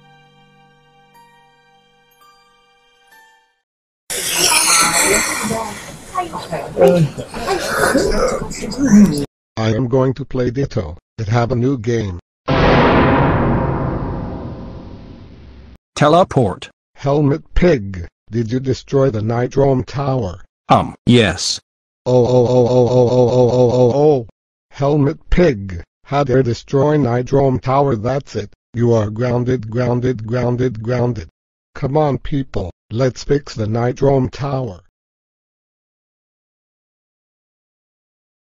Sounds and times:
Speech: 0:04.8 - 0:12.2, 0:16.0 - 0:34.9.

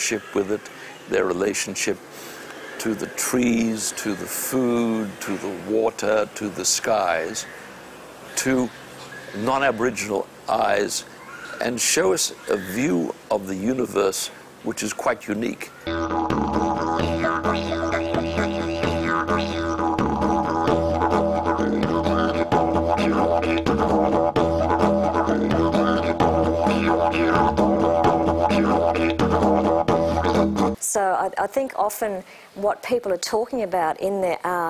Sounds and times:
Speech: 0:11.6 - 0:15.7, 0:30.8 - 0:34.6
Didgeridoo: 0:15.8 - 0:30.8.

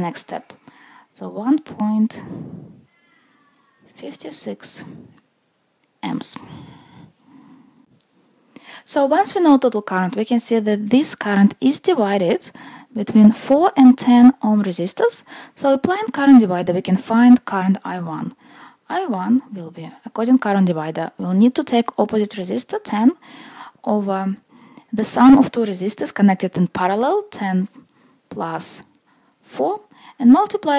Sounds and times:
Speech: 0:00.0 - 0:00.5, 0:01.2 - 0:02.3, 0:03.9 - 0:05.0, 0:06.0 - 0:06.5, 0:08.9 - 0:23.2, 0:23.9 - 0:24.4, 0:25.0 - 0:27.7, 0:28.3 - 0:28.9, 0:29.5 - 0:30.7.

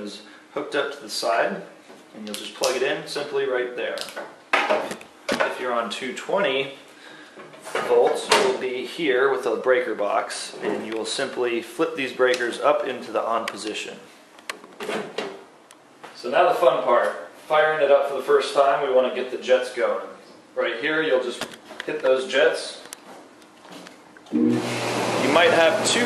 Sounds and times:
Speech: 0:00.0 - 0:04.2, 0:05.3 - 0:06.8, 0:07.7 - 0:14.1, 0:16.1 - 0:22.9, 0:25.2 - 0:26.0.

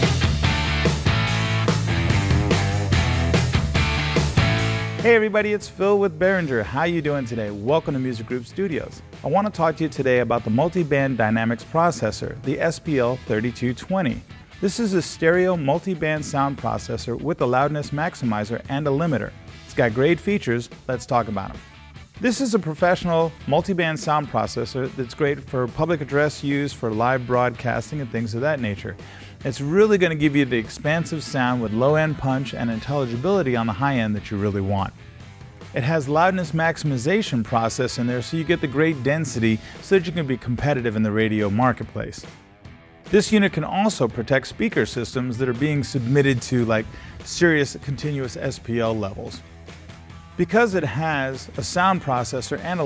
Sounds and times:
Music: 0:00.0 - 0:52.8
Speech: 0:05.0 - 0:21.6, 0:22.2 - 0:35.0, 0:35.7 - 0:42.4, 0:43.1 - 0:49.4, 0:50.4 - 0:52.8.

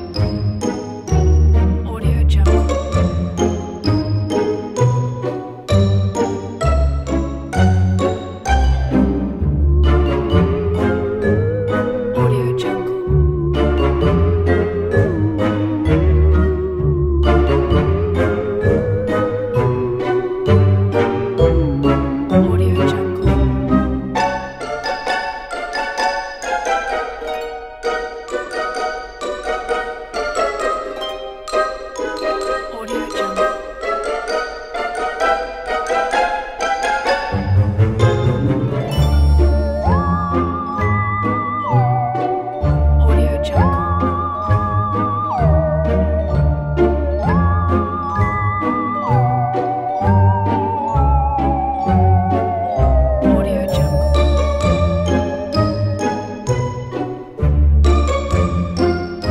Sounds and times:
Music: 0:00.0 - 0:59.3
Speech: 0:01.8 - 0:02.6, 0:12.2 - 0:12.9, 0:22.4 - 0:23.3, 0:32.0 - 0:33.5, 0:43.0 - 0:43.8, 0:53.3 - 0:53.9.

